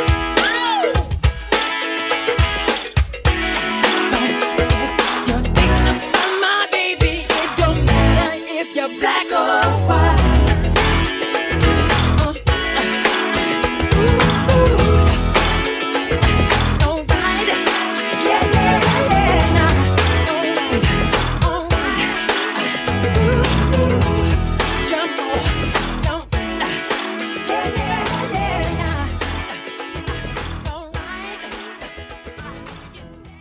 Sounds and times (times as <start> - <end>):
Pop music: 0.0 - 33.4
Singing: 4.1 - 10.6, 13.9 - 15.2, 16.8 - 29.6, 30.7 - 33.4.